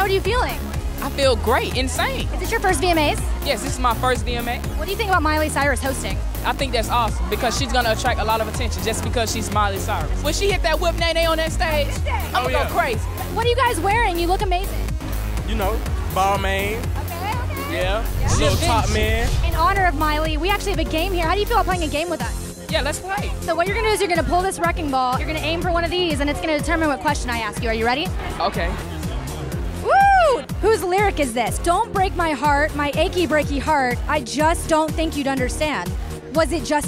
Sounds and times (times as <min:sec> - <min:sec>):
Music: 0:00.0 - 0:36.8.